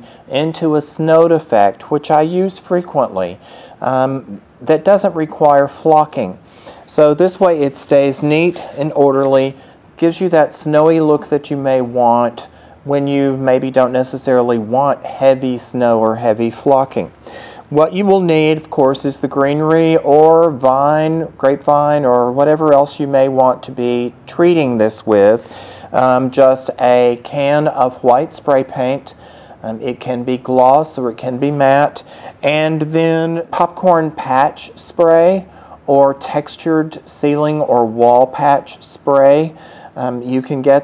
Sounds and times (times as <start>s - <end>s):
Speech: 0.0s - 40.8s.